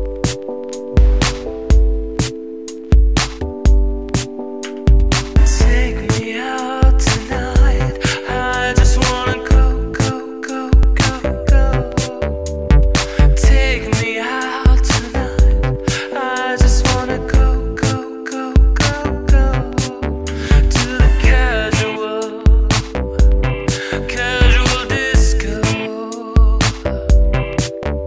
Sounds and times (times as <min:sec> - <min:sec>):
Music: 0:00.0 - 0:28.0.